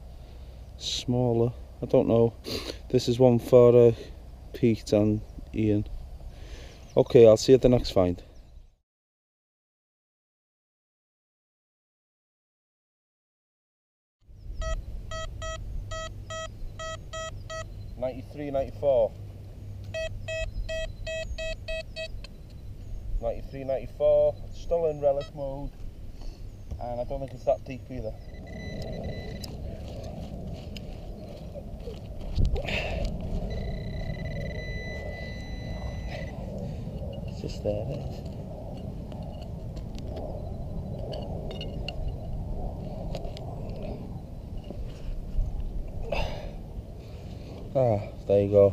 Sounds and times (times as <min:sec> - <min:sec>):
Speech: 0:00.8 - 0:05.9, 0:07.0 - 0:08.3, 0:18.0 - 0:19.2, 0:23.2 - 0:25.7, 0:26.8 - 0:28.2, 0:37.3 - 0:38.1, 0:47.8 - 0:48.7.